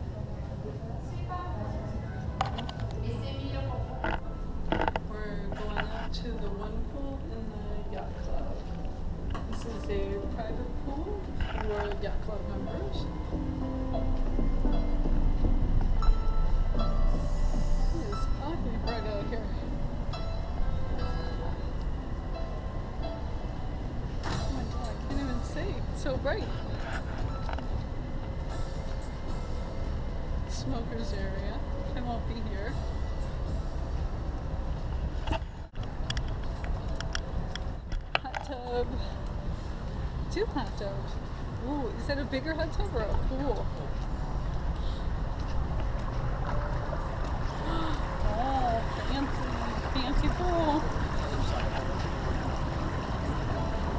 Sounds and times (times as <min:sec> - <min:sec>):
Ship: 0:00.0 - 0:53.9.